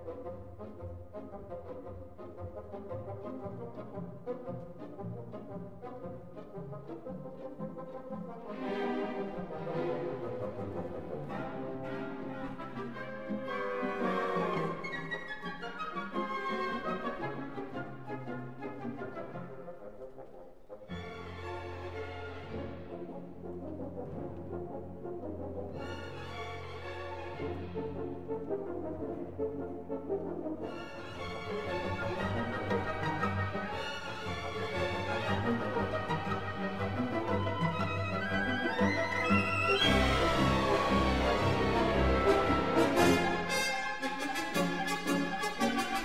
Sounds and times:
Music: 0.0 - 46.0.

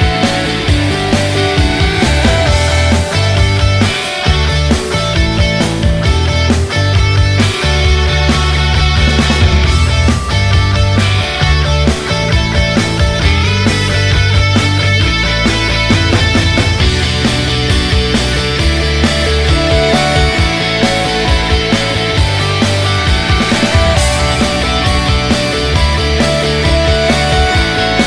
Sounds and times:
Music: 0.0 - 28.0.

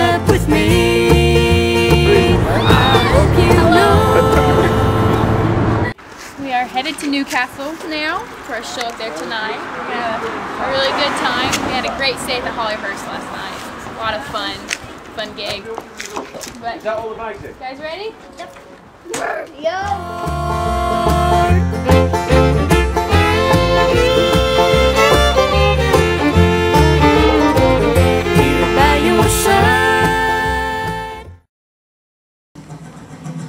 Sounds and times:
Country: 0.0 - 5.9, 19.2 - 31.3
Banjo: 0.0 - 6.0, 19.9 - 31.3
Guitar: 0.0 - 6.0, 19.8 - 31.4.

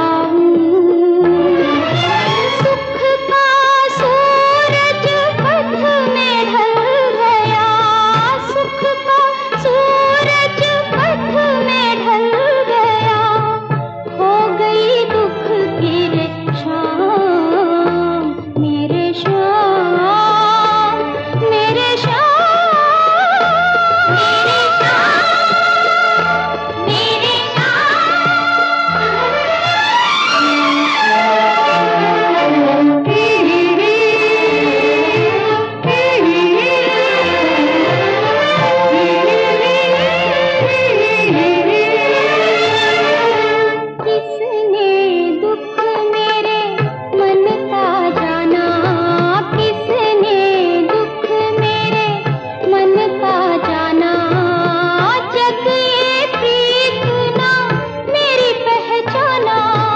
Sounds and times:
Music of Bollywood: 0.0 - 59.9.

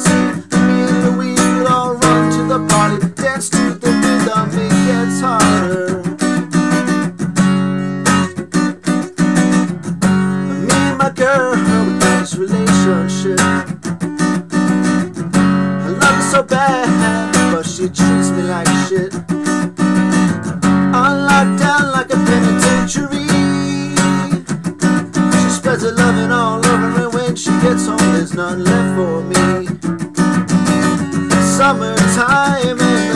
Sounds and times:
Guitar: 0.0 - 33.1.

